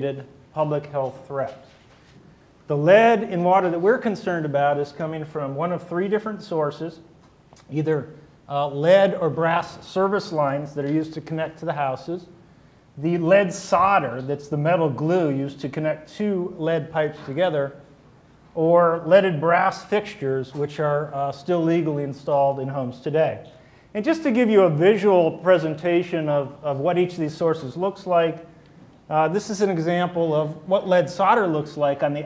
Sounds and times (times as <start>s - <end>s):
Speech: 0.0s - 1.8s, 2.7s - 12.4s, 13.0s - 17.8s, 18.6s - 28.5s, 29.1s - 32.2s.